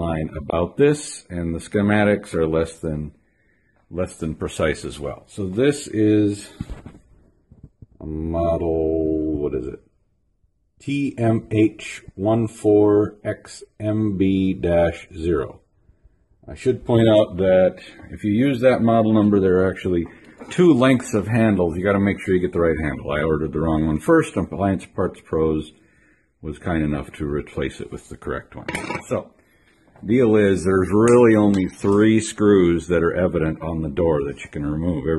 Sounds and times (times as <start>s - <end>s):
Speech: 0.0s - 3.2s, 3.9s - 6.8s, 8.0s - 9.9s, 10.8s - 15.7s, 16.4s - 25.8s, 26.4s - 29.4s, 30.0s - 35.1s.